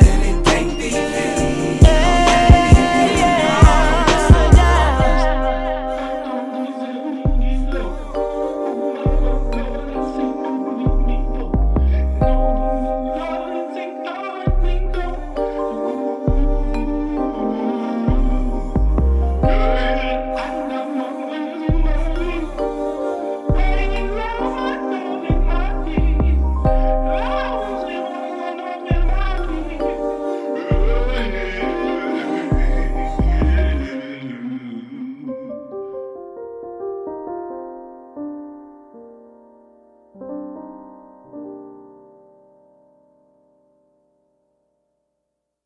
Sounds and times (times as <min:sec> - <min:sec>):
Electric piano: 0:00.0 - 0:44.5.